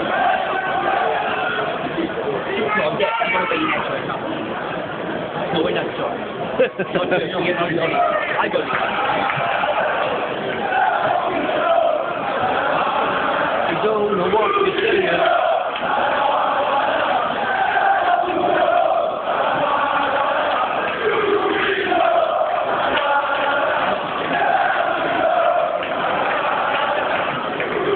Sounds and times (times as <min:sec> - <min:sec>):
Speech: 0:02.0 - 0:04.5, 0:05.5 - 0:08.8, 0:13.7 - 0:15.2.